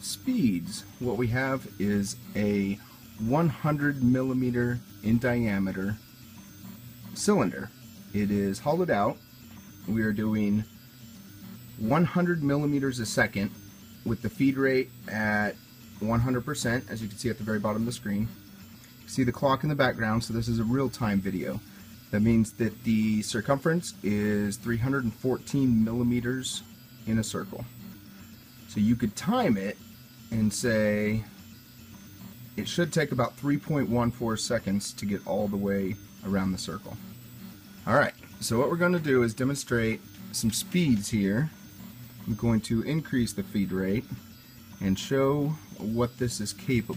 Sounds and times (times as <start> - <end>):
Speech: 0.0 - 6.0, 7.2 - 9.2, 9.9 - 10.7, 11.8 - 18.4, 19.1 - 27.7, 28.7 - 31.3, 32.6 - 37.0, 37.8 - 41.6, 42.3 - 44.2, 44.8 - 46.9.